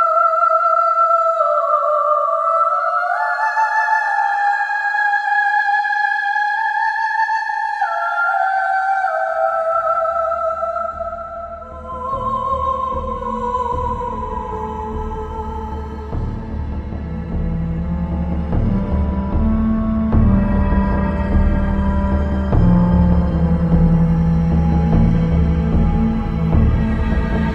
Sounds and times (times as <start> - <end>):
Music: 0.0 - 27.5.